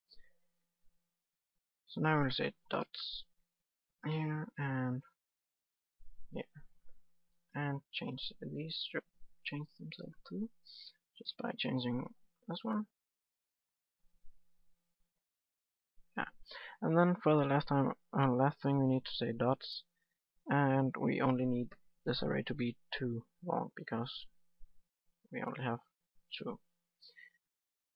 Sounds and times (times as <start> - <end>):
Speech: 1.9 - 3.3, 4.0 - 5.2, 6.3 - 6.6, 7.6 - 12.9, 16.2 - 19.9, 20.5 - 24.4, 25.3 - 27.2.